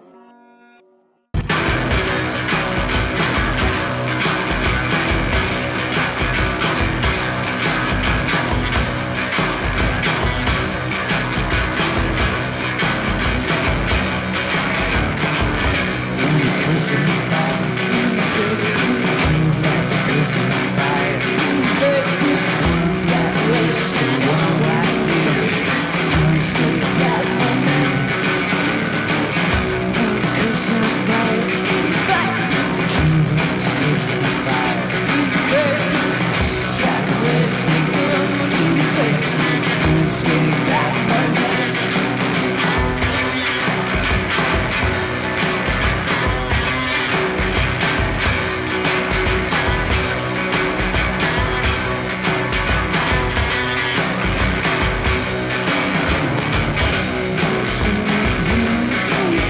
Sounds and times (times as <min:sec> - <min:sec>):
Music: 0:00.0 - 0:59.5.